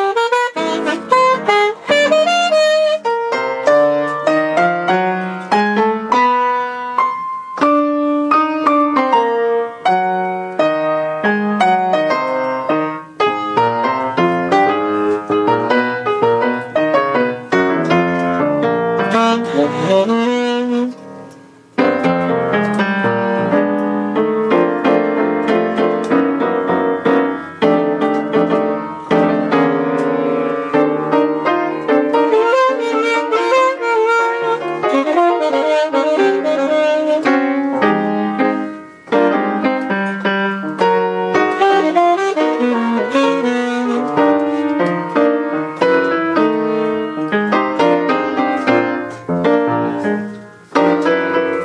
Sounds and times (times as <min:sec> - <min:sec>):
Piano: 0:00.0 - 0:51.6.